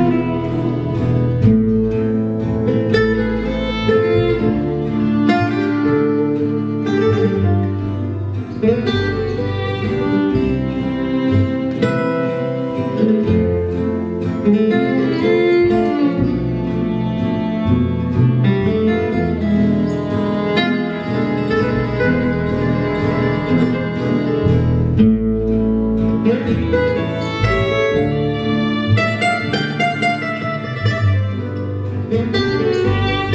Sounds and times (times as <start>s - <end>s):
Guitar: 0.0s - 33.3s
Inside, large room or hall: 0.0s - 33.3s.